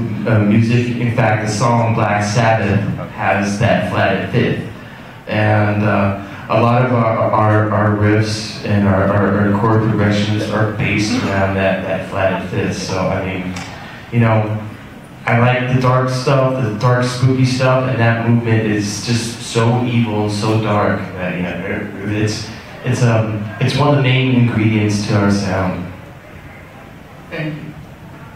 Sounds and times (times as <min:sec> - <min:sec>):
Speech: 0:00.0 - 0:26.0, 0:27.3 - 0:27.8.